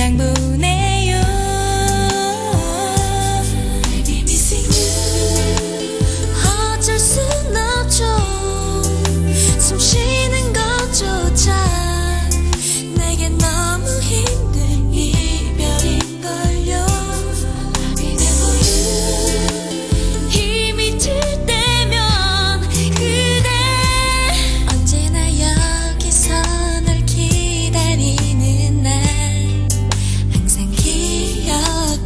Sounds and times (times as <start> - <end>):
Singing: 0.0 - 29.3, 30.4 - 32.0
Music: 0.0 - 32.0.